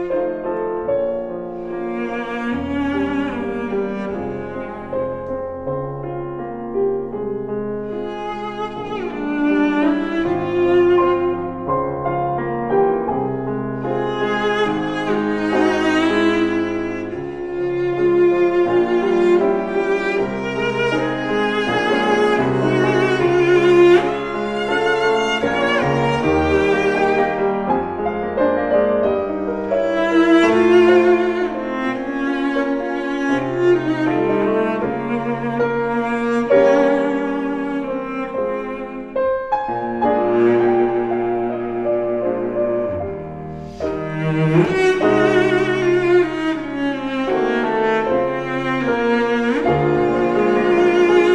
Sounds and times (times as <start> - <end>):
Cello: 0.0 - 51.3.